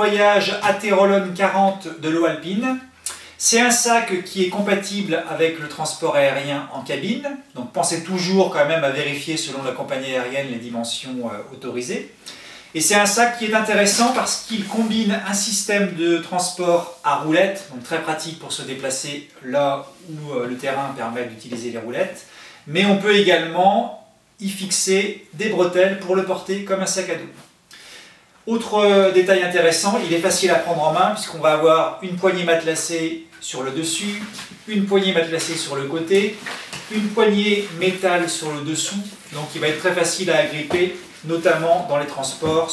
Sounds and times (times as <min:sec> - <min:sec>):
Speech: 0:00.0 - 0:27.5, 0:28.4 - 0:42.7.